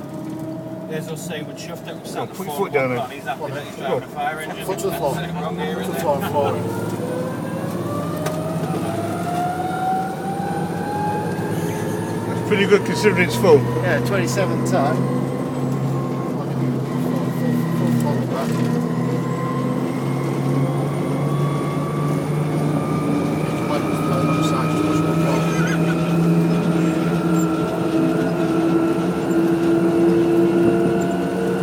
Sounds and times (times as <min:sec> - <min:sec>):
Vehicle: 0:00.0 - 0:31.6
Speech: 0:00.9 - 0:06.7, 0:12.3 - 0:15.0, 0:16.3 - 0:18.7, 0:23.7 - 0:26.0.